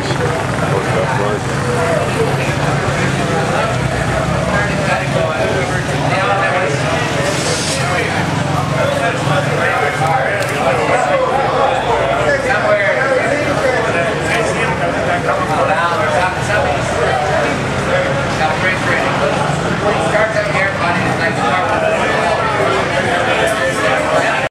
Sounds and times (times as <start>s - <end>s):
Speech: 0.0s - 24.5s.